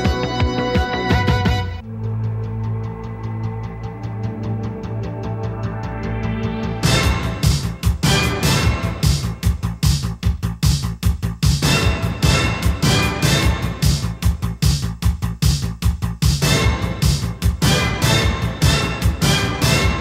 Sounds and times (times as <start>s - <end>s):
Music: 0.0s - 20.0s.